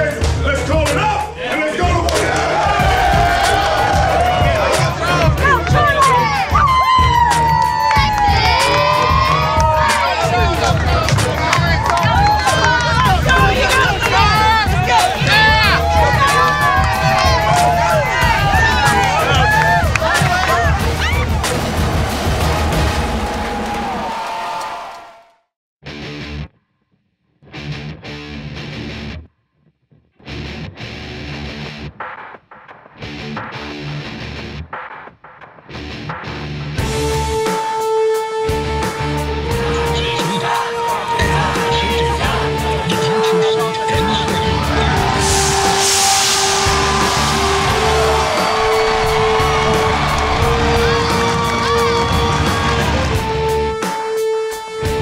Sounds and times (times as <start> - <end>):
Music: 0.0 - 55.0.